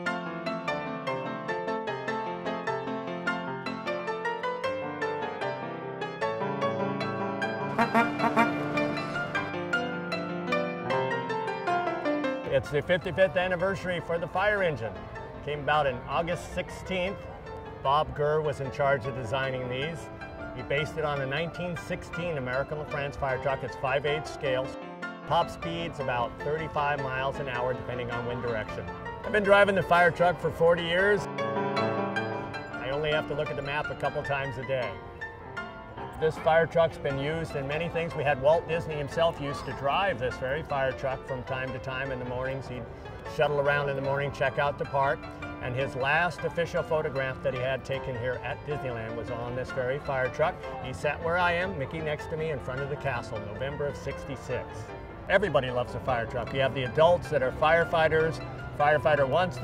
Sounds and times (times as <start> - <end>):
Music: 0.0 - 59.6
Speech: 12.5 - 17.2, 17.8 - 20.0, 20.6 - 31.3, 32.8 - 35.0, 36.2 - 59.6.